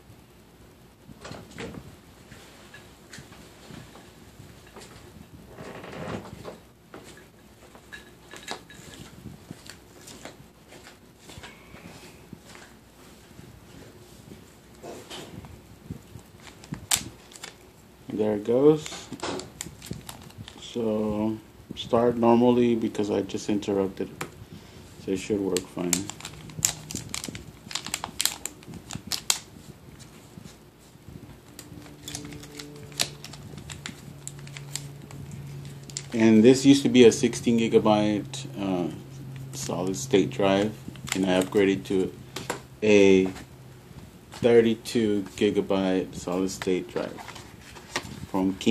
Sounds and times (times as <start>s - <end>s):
Inside, small room: 0.0s - 48.7s
Speech: 18.1s - 19.1s, 20.6s - 24.2s, 25.0s - 26.1s, 36.2s - 39.0s, 39.6s - 42.2s, 42.8s - 43.4s, 44.4s - 47.2s, 48.3s - 48.7s.